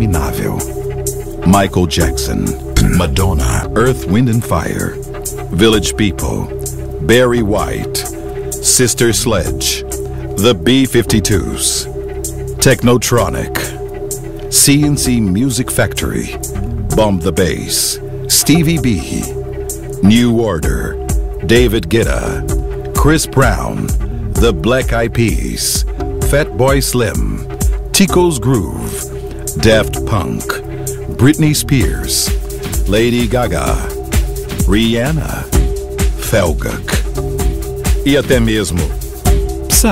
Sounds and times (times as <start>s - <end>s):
Speech: 0.0s - 0.7s, 1.4s - 11.9s, 12.6s - 13.8s, 14.5s - 19.4s, 20.0s - 33.9s, 34.6s - 35.6s, 36.2s - 37.0s, 38.0s - 39.0s
Music: 0.0s - 39.9s.